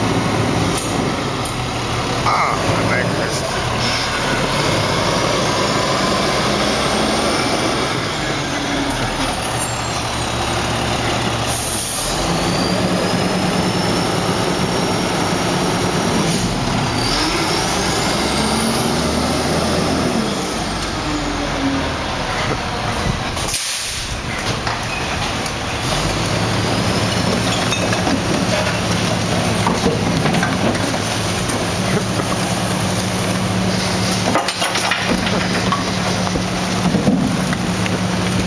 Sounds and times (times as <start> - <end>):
Outside, urban or manmade: 0.0 - 38.4.